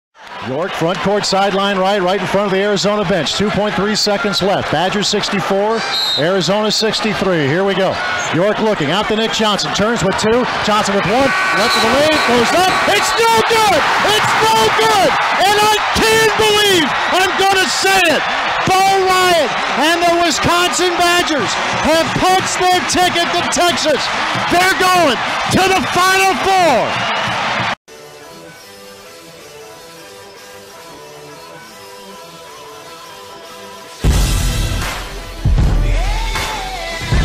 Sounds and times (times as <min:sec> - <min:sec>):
Speech: 0:00.4 - 0:26.9.